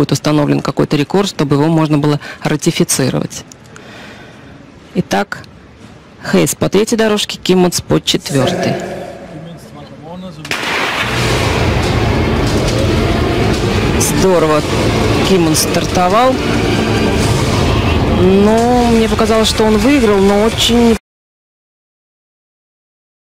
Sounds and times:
Speech: 6.2 - 10.5, 18.2 - 21.0
Music: 11.6 - 21.0.

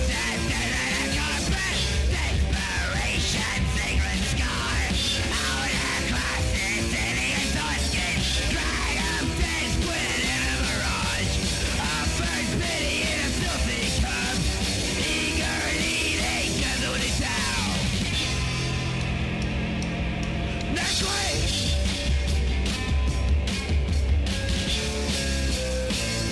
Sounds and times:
Music: 0.0 - 26.3.

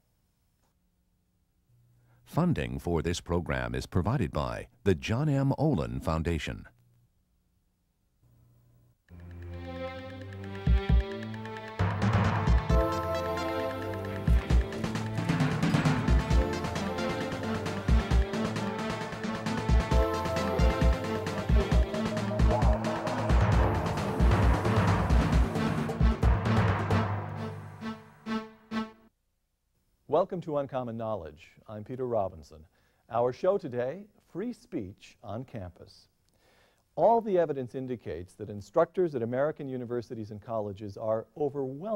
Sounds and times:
Speech: 2.3 - 6.8, 30.1 - 36.2, 37.0 - 41.9
Music: 9.1 - 29.1.

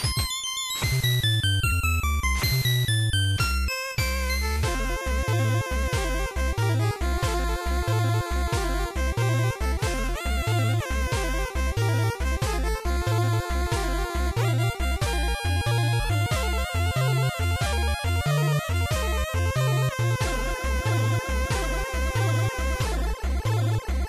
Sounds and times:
Music: 0.0 - 24.0.

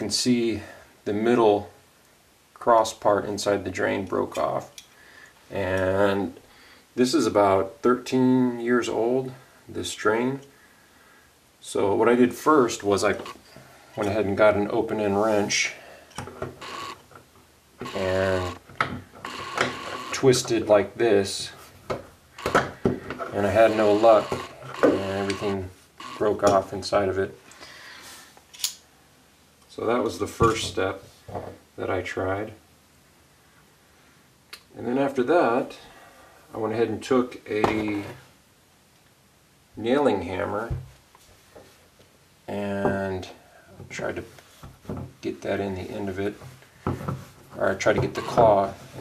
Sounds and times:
Speech: 0.0 - 1.8, 2.6 - 4.8, 5.5 - 6.4, 7.0 - 10.5, 11.6 - 13.3, 14.0 - 15.8, 17.8 - 18.6, 20.1 - 21.6, 23.3 - 27.4, 29.7 - 31.1, 31.8 - 32.6, 34.6 - 35.9, 36.5 - 38.2, 39.8 - 40.8, 42.5 - 44.4, 45.2 - 46.4, 47.6 - 48.8.

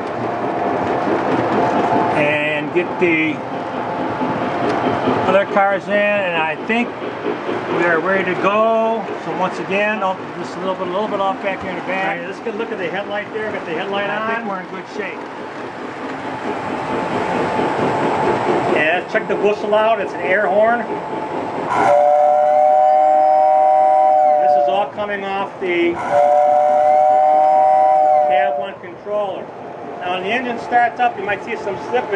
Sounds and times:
Railroad car, train wagon: 0.0 - 32.1
Train: 0.0 - 32.1
Speech: 2.2 - 3.4, 5.3 - 7.0, 7.7 - 15.2, 18.7 - 21.0, 24.4 - 26.0, 28.3 - 32.1.

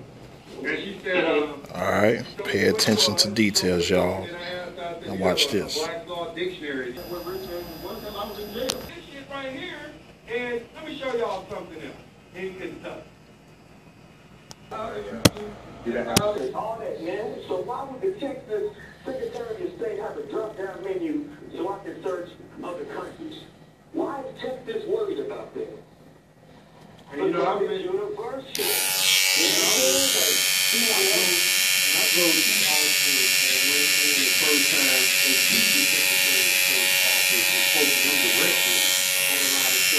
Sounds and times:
Speech: 0.5 - 13.1, 14.7 - 25.9, 27.1 - 28.8, 29.4 - 39.9.

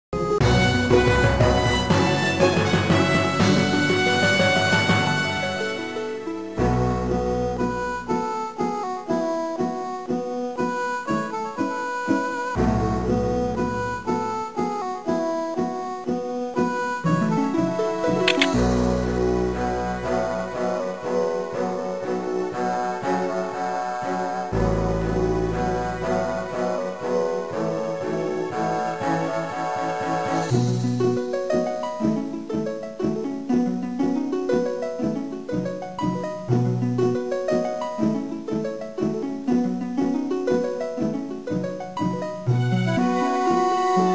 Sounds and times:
Bowed string instrument: 0.2 - 44.1.

